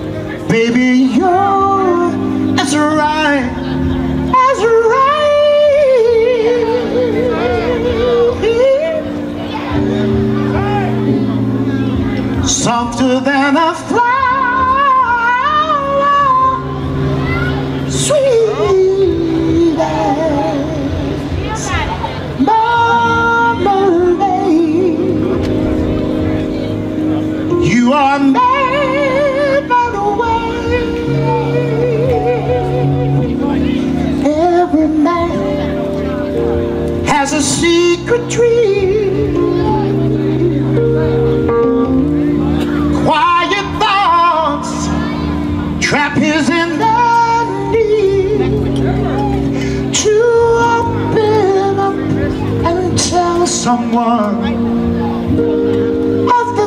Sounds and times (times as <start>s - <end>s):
Music: 0.0s - 56.6s.